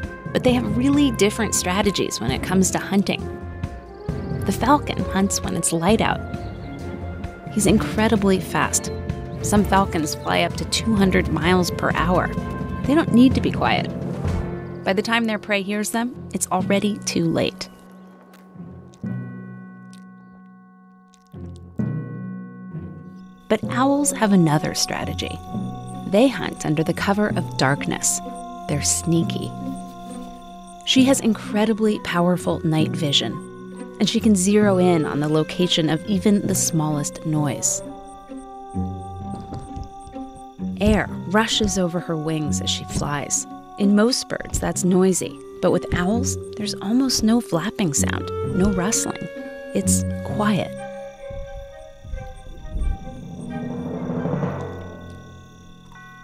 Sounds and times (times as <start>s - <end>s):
Music: 0.0s - 56.2s
Speech: 0.3s - 3.2s, 4.5s - 6.2s, 7.5s - 8.9s, 9.5s - 13.9s, 14.9s - 17.7s, 23.5s - 25.4s, 26.1s - 29.5s, 30.9s - 33.4s, 34.0s - 37.8s, 40.8s - 50.8s.